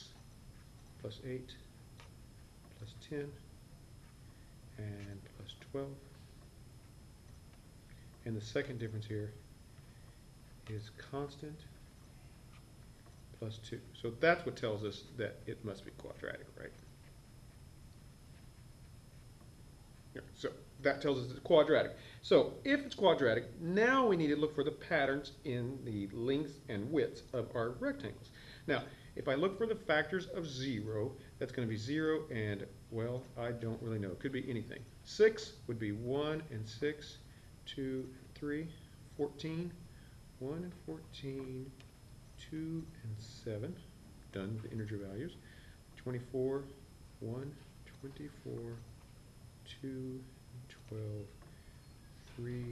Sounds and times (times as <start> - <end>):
Speech: 1.0 - 1.7, 2.8 - 3.5, 4.8 - 6.2, 8.2 - 9.4, 10.6 - 11.8, 13.4 - 16.8, 20.1 - 39.8, 40.4 - 41.8, 42.4 - 45.4, 46.0 - 48.9, 49.6 - 51.4, 52.3 - 52.7.